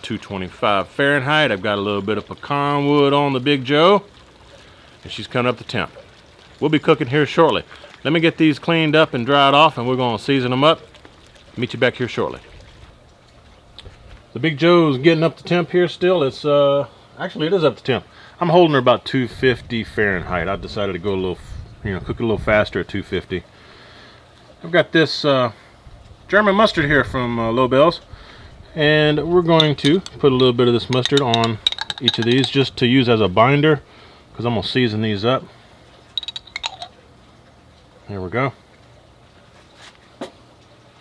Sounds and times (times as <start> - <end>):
Speech: 0.0 - 4.1, 5.0 - 6.0, 6.6 - 10.8, 11.6 - 12.5, 14.3 - 23.5, 24.6 - 25.6, 26.3 - 28.1, 28.7 - 33.8, 34.4 - 35.5, 38.0 - 38.6.